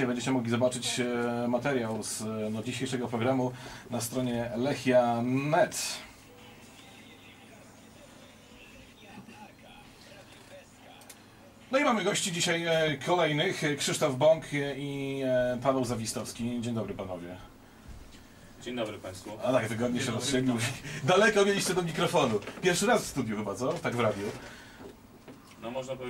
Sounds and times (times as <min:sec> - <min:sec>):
Speech: 0:00.0 - 0:06.2, 0:11.6 - 0:17.5, 0:18.6 - 0:24.4, 0:25.6 - 0:26.1.